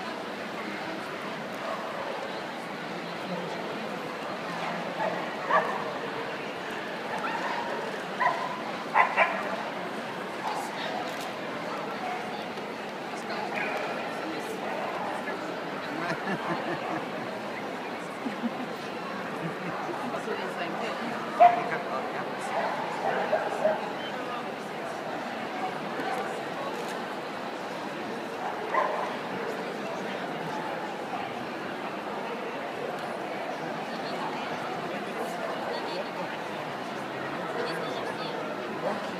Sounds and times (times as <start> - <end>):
Speech: 0.0 - 39.1.